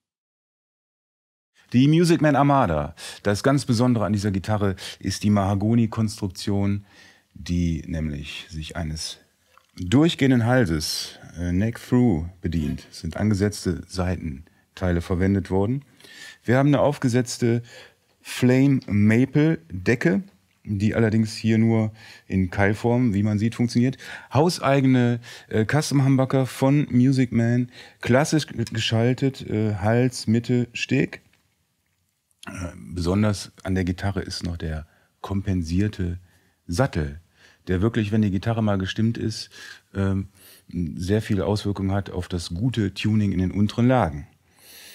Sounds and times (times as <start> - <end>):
Speech: 1.7 - 31.3, 32.4 - 44.4.